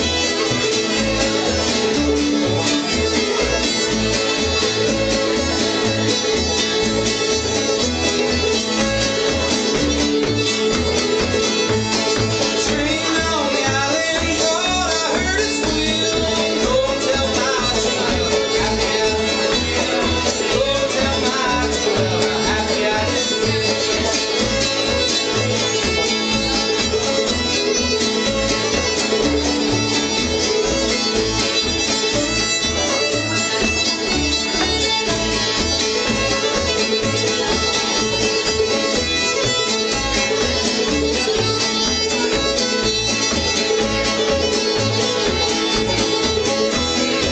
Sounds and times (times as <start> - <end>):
Music: 0.0 - 47.3.